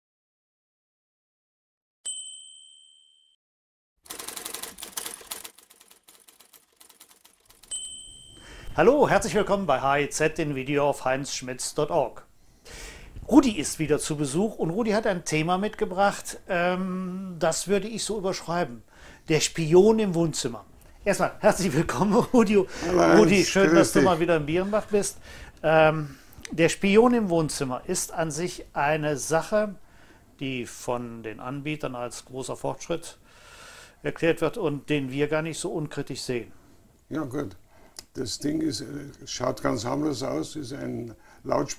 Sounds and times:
Speech: 8.8 - 12.3, 13.3 - 29.8, 30.4 - 33.2, 34.0 - 36.5, 37.1 - 41.7.

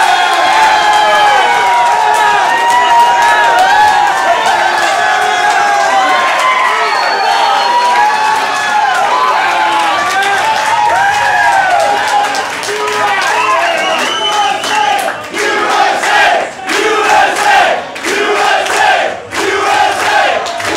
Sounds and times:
Inside, large room or hall: 0.0 - 20.7
Speech: 12.0 - 20.7.

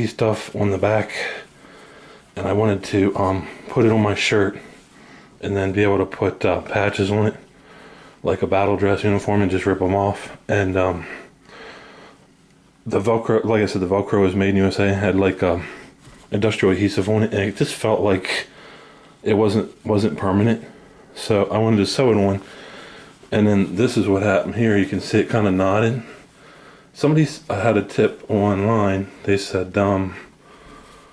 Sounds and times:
Speech: 0.0 - 1.5, 2.4 - 4.8, 5.4 - 7.5, 8.2 - 11.3, 12.8 - 18.5, 19.2 - 22.5, 23.3 - 26.2, 27.0 - 30.3.

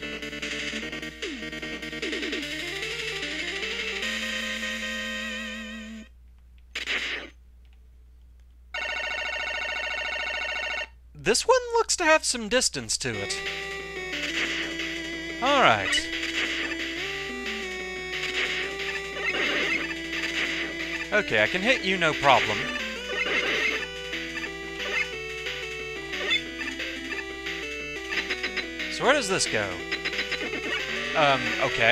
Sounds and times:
Music: 0.0 - 6.1, 13.2 - 31.9
Speech: 11.2 - 13.4, 15.4 - 16.0, 21.1 - 22.7, 28.9 - 29.8, 31.2 - 31.9.

